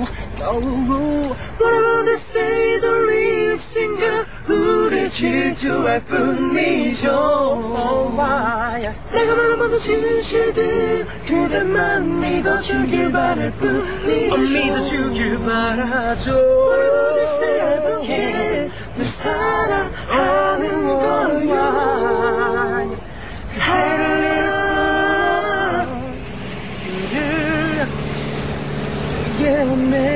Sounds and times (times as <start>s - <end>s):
Male singing: 0.0s - 23.0s, 29.3s - 30.1s
Car: 0.0s - 30.1s.